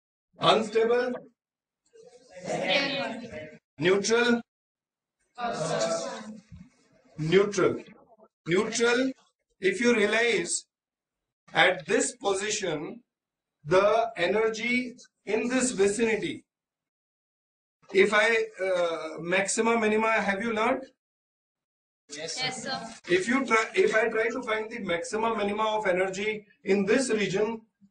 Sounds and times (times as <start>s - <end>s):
Speech: 0.4s - 1.2s, 2.4s - 4.4s, 5.4s - 6.4s, 7.2s - 10.7s, 11.6s - 13.0s, 13.7s - 16.5s, 17.9s - 21.0s, 22.1s - 27.7s.